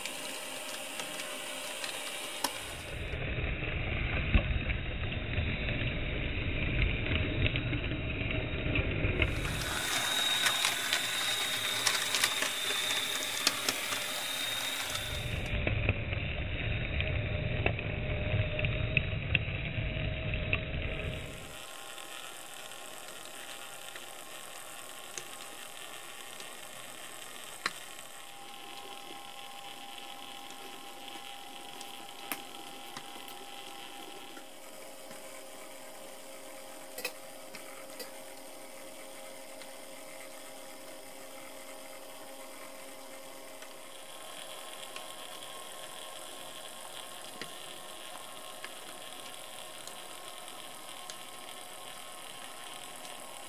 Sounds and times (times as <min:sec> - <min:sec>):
Hum: 0:00.0 - 0:53.4
Mains hum: 0:00.0 - 0:53.4.